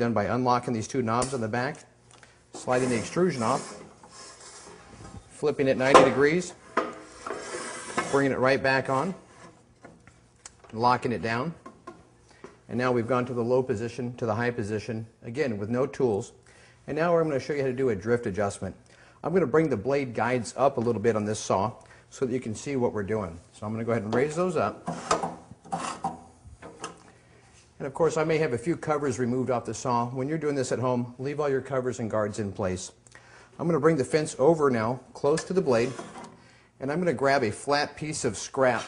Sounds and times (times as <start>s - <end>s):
Speech: 0.0s - 1.9s, 2.6s - 3.7s, 5.4s - 6.6s, 8.1s - 9.2s, 10.7s - 11.6s, 12.7s - 24.8s, 27.8s - 33.0s, 33.6s - 36.0s, 36.8s - 38.8s.